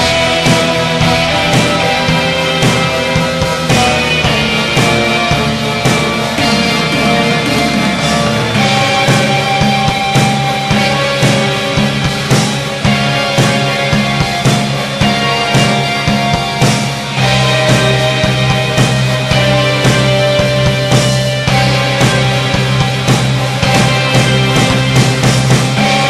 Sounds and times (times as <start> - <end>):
Music: 0.0 - 26.1.